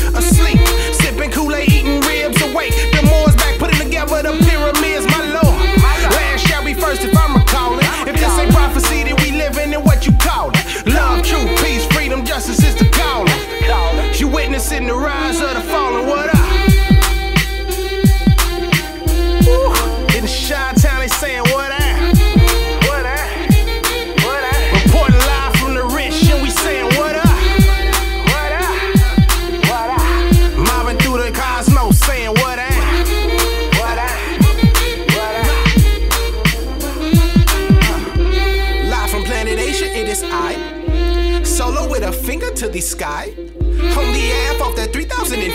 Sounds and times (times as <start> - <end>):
Hip hop music: 0.0 - 45.5.